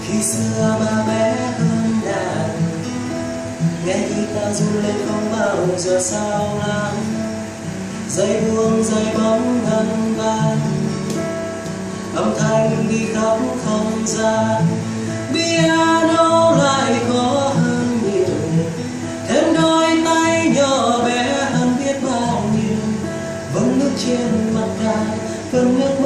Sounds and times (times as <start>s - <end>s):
Acoustic guitar: 0.0s - 26.0s.